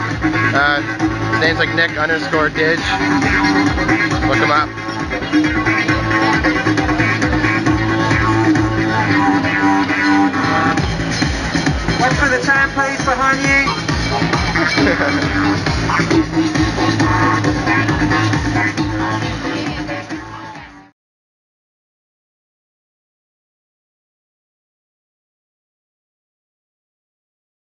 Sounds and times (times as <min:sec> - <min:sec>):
Techno: 0:00.0 - 0:20.9
Speech: 0:00.5 - 0:00.8, 0:01.4 - 0:03.1, 0:04.2 - 0:04.7, 0:14.8 - 0:15.3.